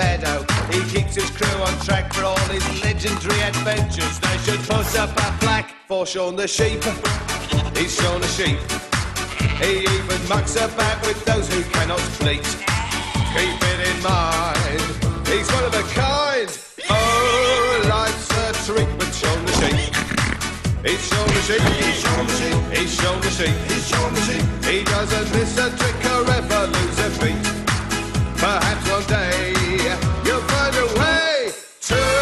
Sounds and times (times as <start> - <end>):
Music: 0.0 - 32.2
Sheep: 7.4 - 7.9, 9.2 - 9.8, 12.6 - 13.9.